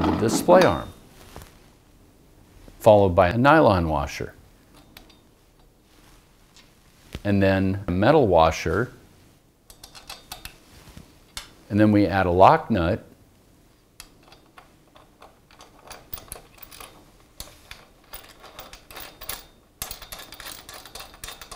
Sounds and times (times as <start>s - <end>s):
Speech: 0.0s - 1.0s, 2.8s - 4.4s, 7.2s - 9.0s, 11.7s - 13.1s
Inside, small room: 0.0s - 21.5s.